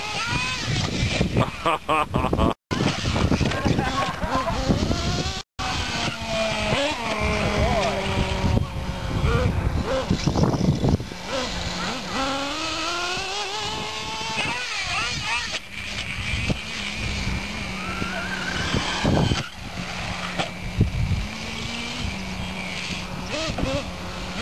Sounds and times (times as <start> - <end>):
Car: 5.8 - 24.4.